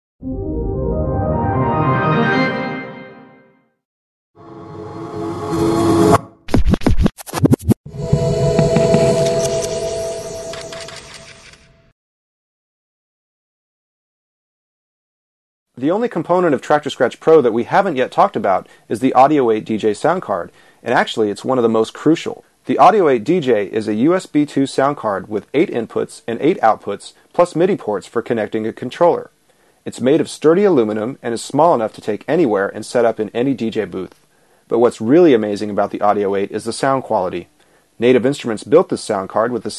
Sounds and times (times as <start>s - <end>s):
Music: 0.2s - 3.8s.